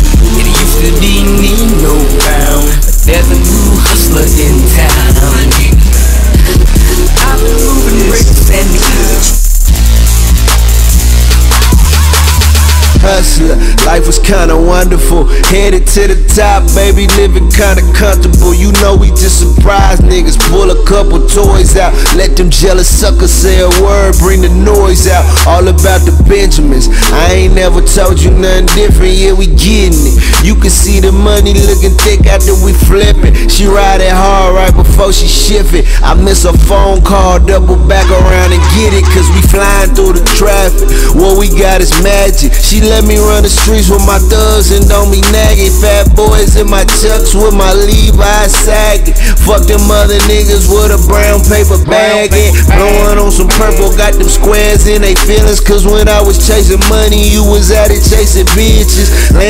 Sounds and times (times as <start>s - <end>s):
Hip hop music: 0.0s - 59.4s
Rapping: 0.0s - 59.4s.